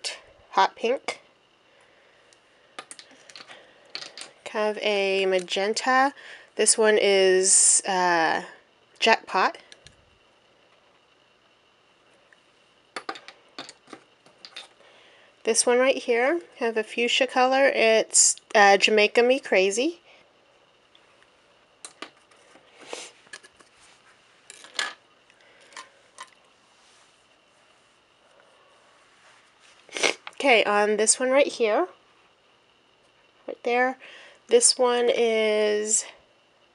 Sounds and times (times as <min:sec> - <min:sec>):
Speech: 0:00.0 - 0:01.2, 0:04.5 - 0:09.6, 0:15.5 - 0:20.0, 0:30.4 - 0:32.0, 0:33.5 - 0:36.2.